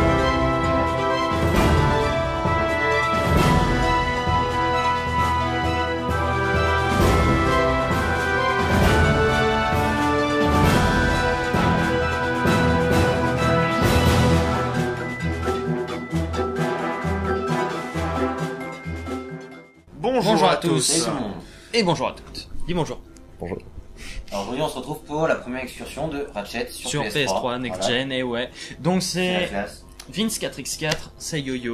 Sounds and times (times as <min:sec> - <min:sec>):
Music: 0:00.0 - 0:31.7.